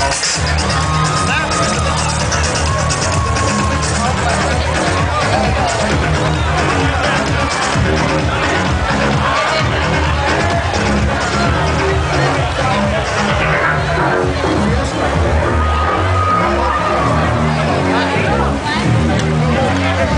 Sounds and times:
Music: 0.0s - 20.1s
Speech: 0.0s - 20.1s.

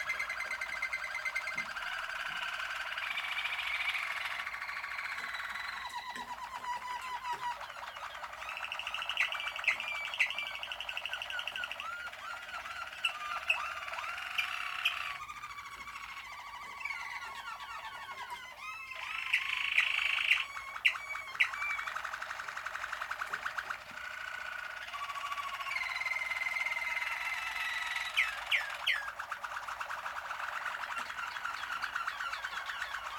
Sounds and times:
Bird: 0.0s - 33.1s
Domestic animals, pets: 0.0s - 33.1s.

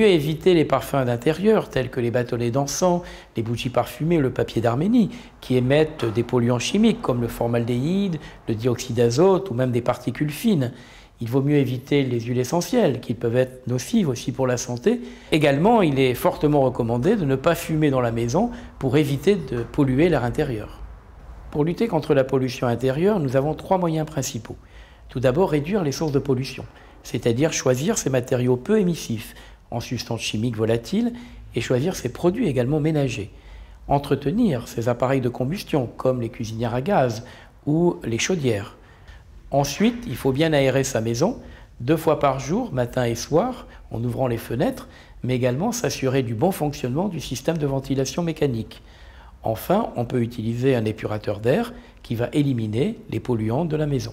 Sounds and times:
Speech: 0.0s - 20.8s, 21.5s - 38.8s, 39.5s - 48.8s, 49.4s - 54.1s.

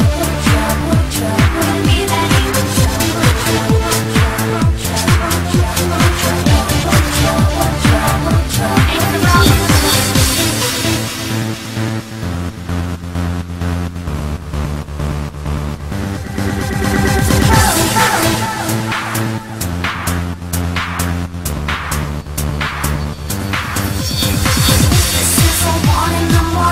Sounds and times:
Techno: 0.0s - 26.7s.

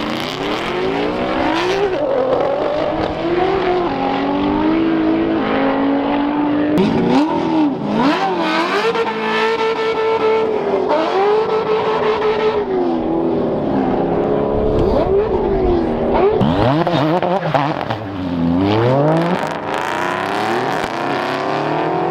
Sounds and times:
Race car, auto racing: 0.0s - 22.1s.

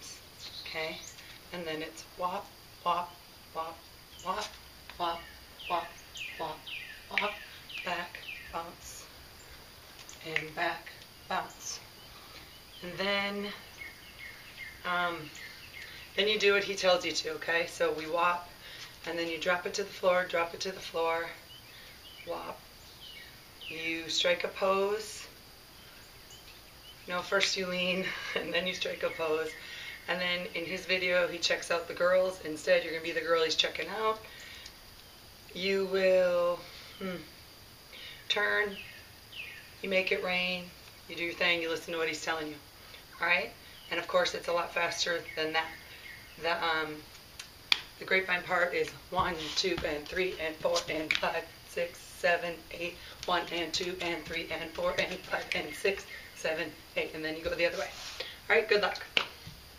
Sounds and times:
Environmental noise: 0.0s - 59.7s.

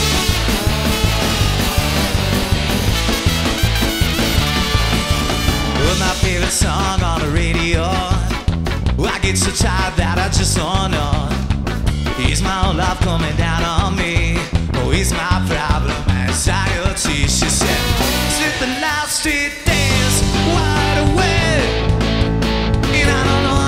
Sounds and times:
Exciting music: 0.0s - 9.0s, 17.0s - 23.6s.

